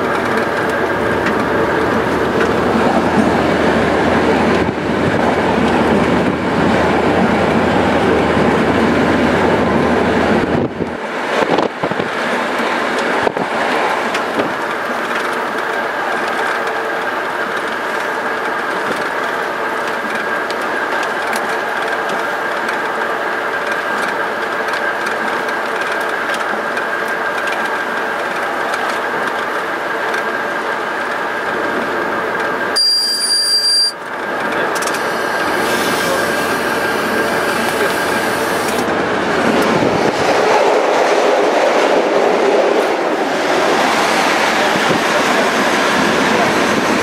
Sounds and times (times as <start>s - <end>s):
Train: 0.0s - 47.0s.